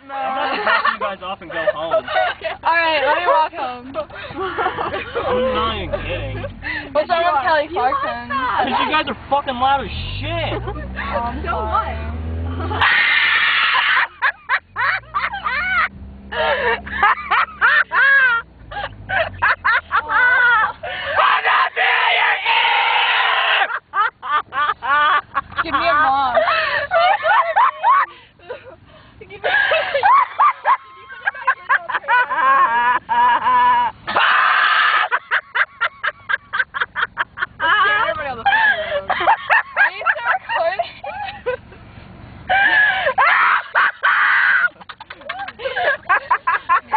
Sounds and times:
Car: 0.0 - 46.9
Outside, urban or manmade: 0.0 - 46.9.

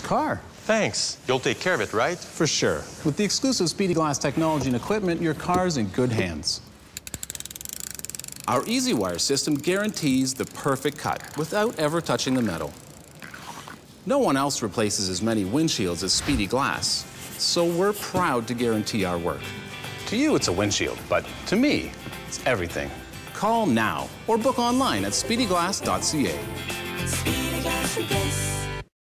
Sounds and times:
Music: 15.0 - 28.9.

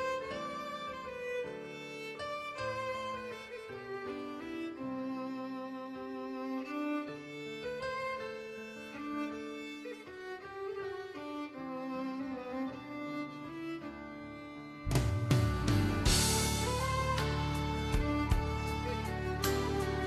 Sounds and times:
Orchestra: 0.0 - 20.0.

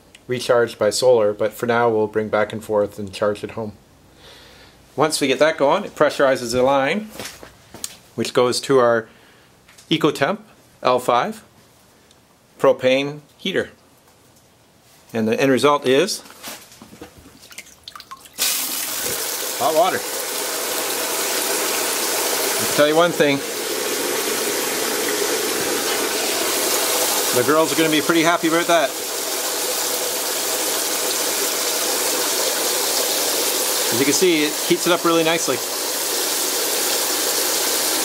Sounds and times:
Water: 17.4 - 38.0.

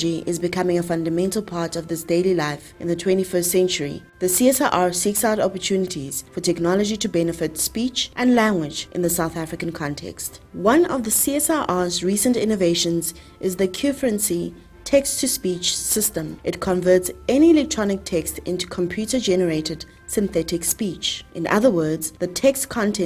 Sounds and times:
Music: 0.0 - 23.0
Speech: 0.0 - 23.0.

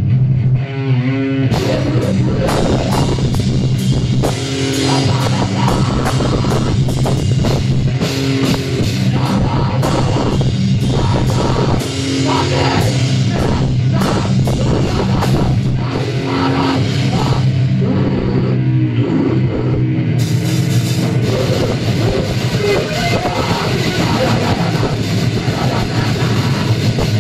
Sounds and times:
Rock music: 0.0 - 27.2.

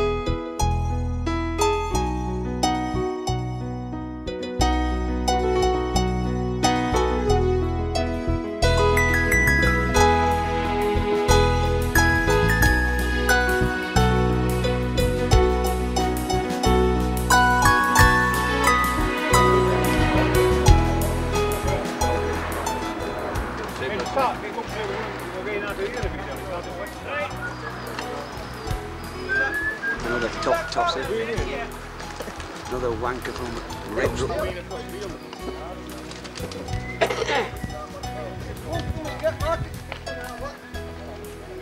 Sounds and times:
Music: 0.0 - 41.6.

